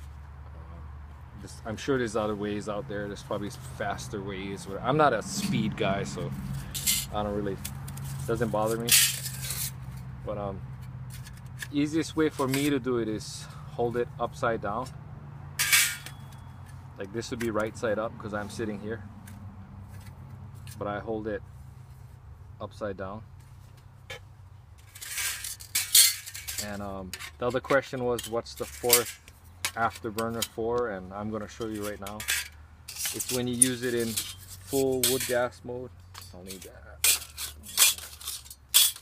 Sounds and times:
Speech: 1.4s - 6.3s, 7.1s - 7.6s, 8.3s - 9.0s, 10.2s - 10.6s, 11.7s - 14.9s, 17.0s - 19.0s, 20.8s - 21.4s, 22.6s - 23.2s, 26.6s - 29.1s, 29.8s - 32.2s, 33.1s - 37.0s.

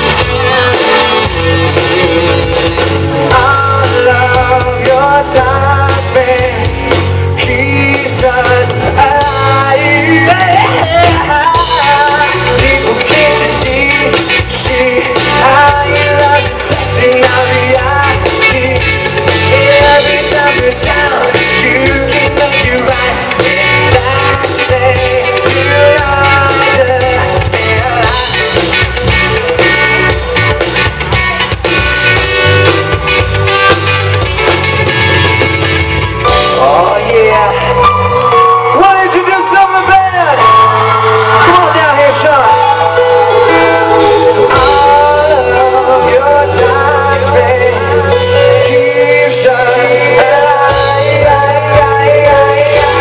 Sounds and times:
Music: 0.0s - 53.0s
Whoop: 37.6s - 44.6s
Speech: 38.8s - 40.4s
Singing: 42.8s - 53.0s.

